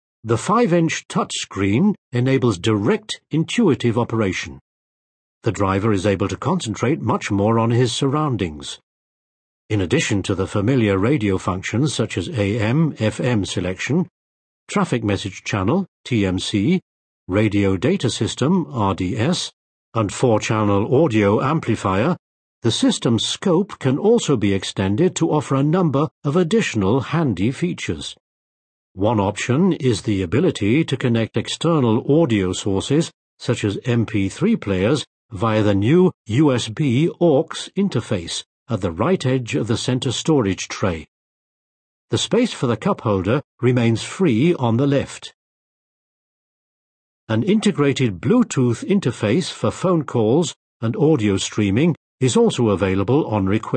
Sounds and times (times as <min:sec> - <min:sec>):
Speech: 0:00.3 - 0:04.6, 0:05.5 - 0:08.8, 0:09.7 - 0:14.1, 0:14.7 - 0:28.2, 0:29.0 - 0:41.1, 0:42.1 - 0:45.4, 0:47.3 - 0:53.7.